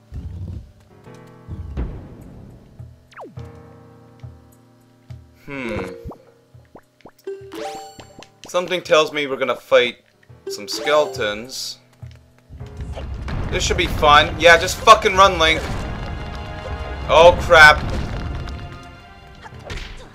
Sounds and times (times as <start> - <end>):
Music: 0.0 - 20.1
Speech: 8.5 - 11.8, 13.5 - 15.6, 17.1 - 17.8.